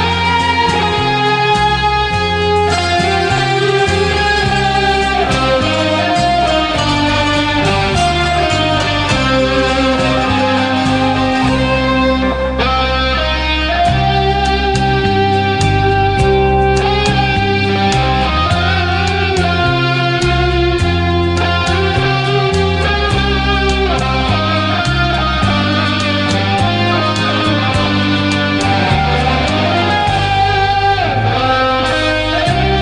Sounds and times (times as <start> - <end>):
Guitar: 0.0 - 32.8.